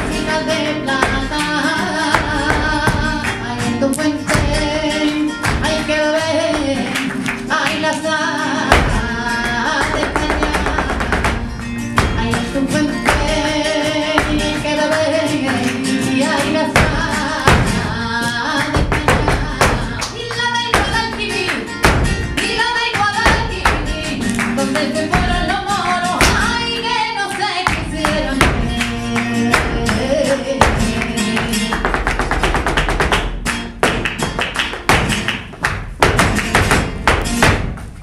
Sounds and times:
Flamenco: 0:00.0 - 0:38.0.

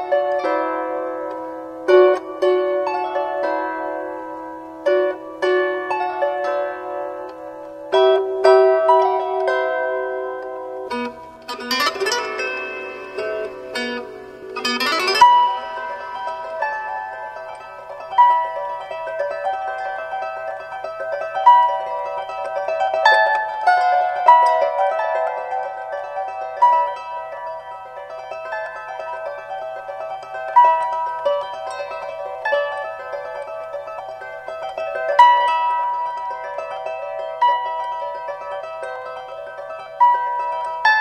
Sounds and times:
Pizzicato: 0:00.0 - 0:19.4
Harp: 0:00.0 - 0:41.0.

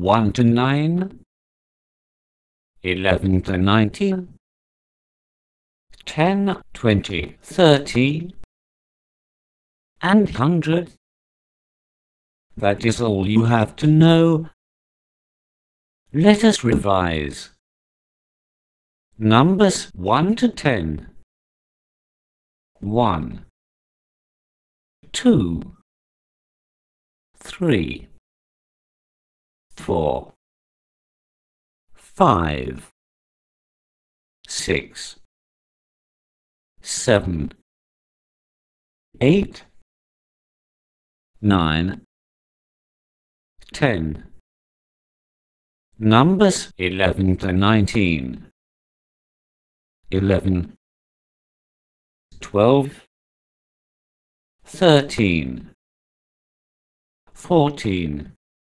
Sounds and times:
Speech: 0:00.0 - 0:01.3, 0:02.8 - 0:04.4, 0:06.0 - 0:08.5, 0:10.0 - 0:11.0, 0:12.6 - 0:14.6, 0:16.1 - 0:17.6, 0:19.2 - 0:21.2, 0:22.8 - 0:23.5, 0:25.1 - 0:25.8, 0:27.4 - 0:28.2, 0:29.8 - 0:30.4, 0:32.0 - 0:32.9, 0:34.5 - 0:35.3, 0:36.8 - 0:37.6, 0:39.2 - 0:39.8, 0:41.4 - 0:42.1, 0:43.6 - 0:44.4, 0:46.0 - 0:48.5, 0:50.1 - 0:50.8, 0:52.4 - 0:53.1, 0:54.7 - 0:55.8, 0:57.4 - 0:58.4.

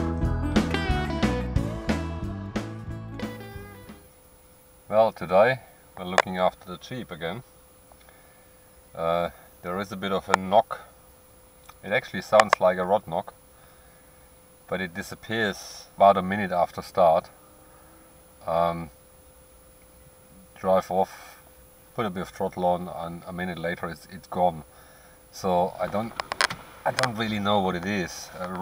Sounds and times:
Speech: 0:04.9 - 0:07.4, 0:09.0 - 0:10.9, 0:11.8 - 0:13.4, 0:14.7 - 0:17.3, 0:18.4 - 0:18.9, 0:20.5 - 0:21.4, 0:22.0 - 0:24.7, 0:25.3 - 0:26.2, 0:26.8 - 0:28.6.

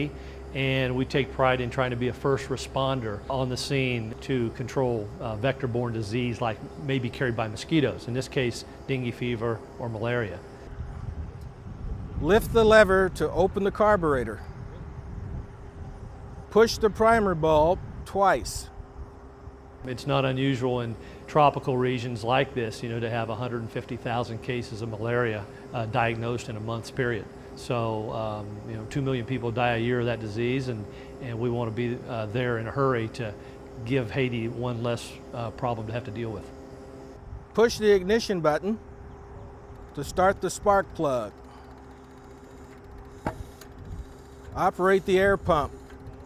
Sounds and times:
Speech: 0:00.0 - 0:10.4, 0:12.2 - 0:14.5, 0:16.6 - 0:18.7, 0:19.9 - 0:36.5, 0:37.6 - 0:38.8, 0:40.0 - 0:41.3, 0:44.6 - 0:45.7.

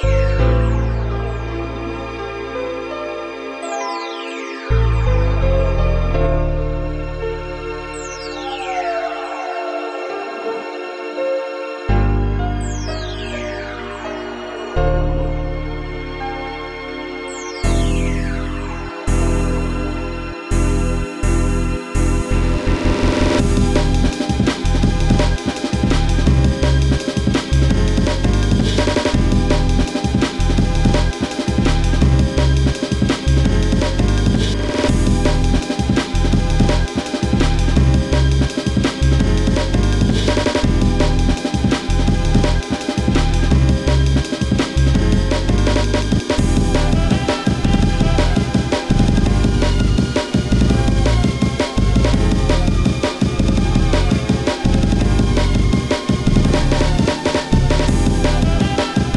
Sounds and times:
Music: 0:00.0 - 0:59.1.

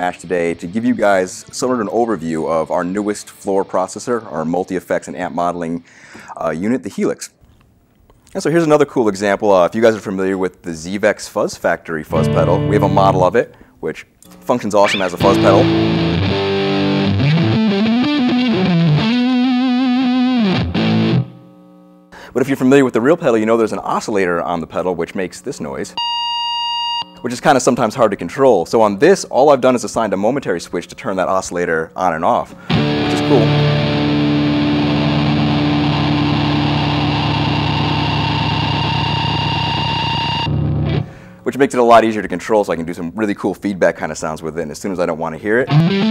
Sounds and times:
Music: 0:00.0 - 0:04.7, 0:12.1 - 0:13.4, 0:14.8 - 0:21.6, 0:32.6 - 0:41.2, 0:45.6 - 0:46.1
Speech: 0:00.0 - 0:07.4, 0:08.3 - 0:15.8, 0:22.4 - 0:26.0, 0:27.2 - 0:32.5, 0:33.1 - 0:33.6, 0:41.4 - 0:45.7.

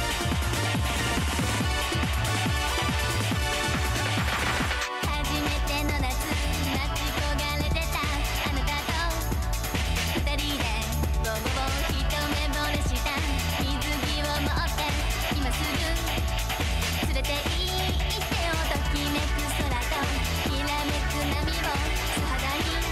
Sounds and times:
Music: 0:00.0 - 0:22.9.

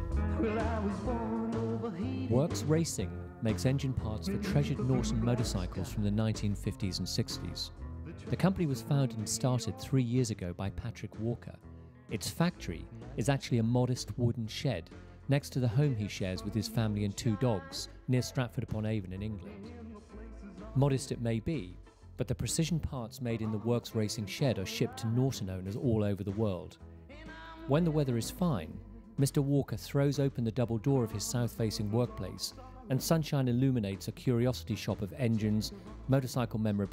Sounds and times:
Music: 0:00.0 - 0:36.9
Speech: 0:02.1 - 0:19.6, 0:20.8 - 0:26.8, 0:27.6 - 0:36.9.

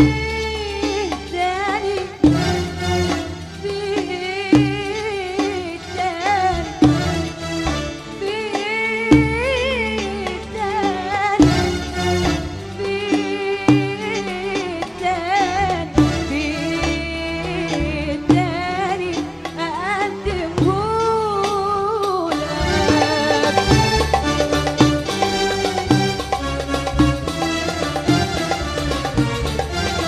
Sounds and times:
Folk music: 0:00.0 - 0:30.0
Middle Eastern music: 0:00.0 - 0:30.0.

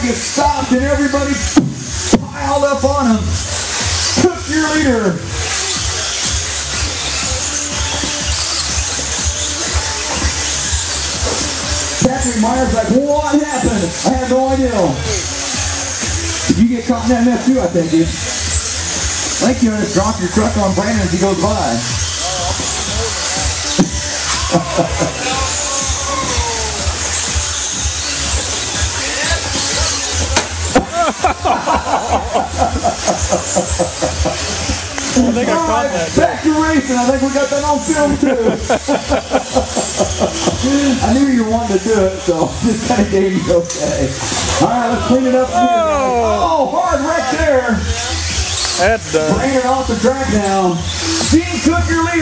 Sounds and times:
Speech: 0:00.0 - 0:01.5, 0:12.0 - 0:15.2, 0:16.5 - 0:18.2, 0:35.2 - 0:38.7, 0:40.6 - 0:48.2, 0:48.8 - 0:52.2
Music: 0:00.0 - 0:52.2.

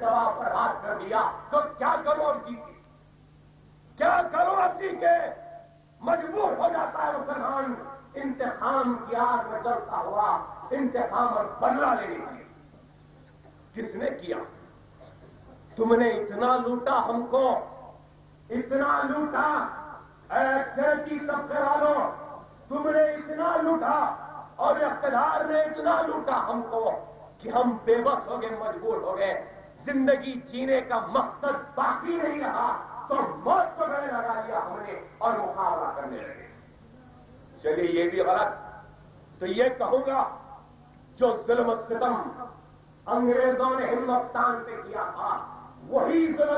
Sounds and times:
Male speech, man speaking: 0:00.0 - 0:02.8, 0:04.0 - 0:12.5, 0:13.8 - 0:14.6, 0:15.7 - 0:17.8, 0:18.5 - 0:36.6, 0:37.6 - 0:38.8, 0:39.4 - 0:40.4, 0:41.2 - 0:46.5
Narration, monologue: 0:00.0 - 0:46.5.

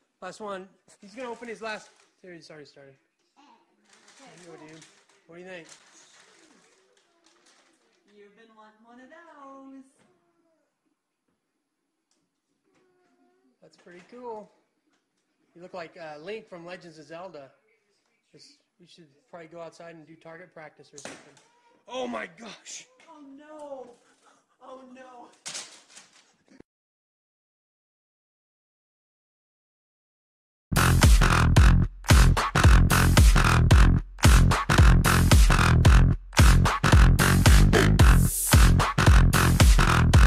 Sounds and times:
Speech: 0:18.3 - 0:23.9
Arrow: 0:21.0 - 0:21.4.

